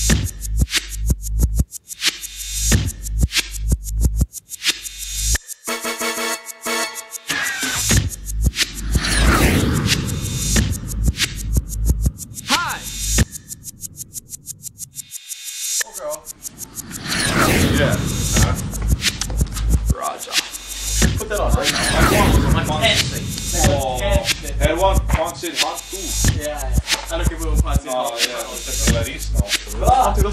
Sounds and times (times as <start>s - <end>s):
Music: 0.0s - 8.6s, 19.0s - 30.3s.